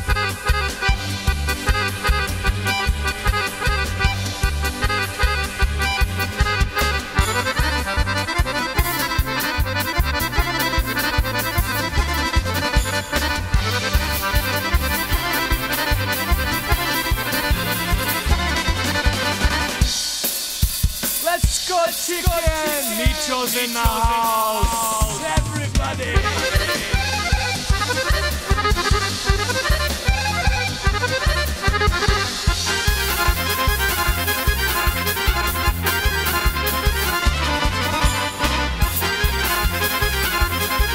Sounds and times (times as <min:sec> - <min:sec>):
Music: 0:00.0 - 0:40.9.